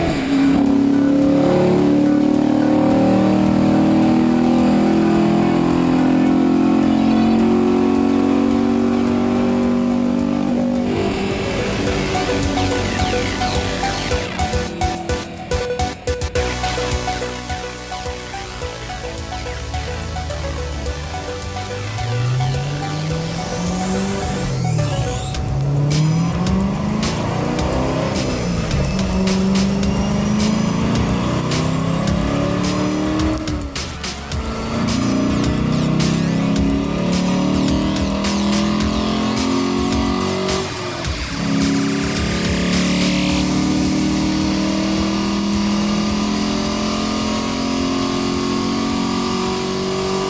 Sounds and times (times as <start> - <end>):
Music: 0.0 - 50.3.